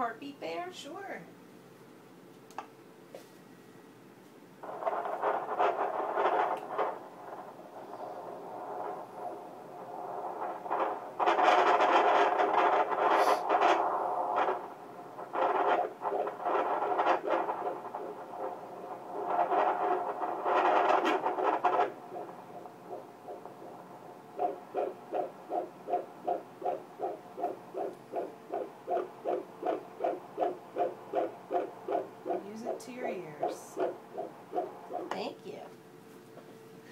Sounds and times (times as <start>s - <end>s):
Speech: 0.0s - 1.3s, 32.4s - 33.8s, 35.1s - 35.8s.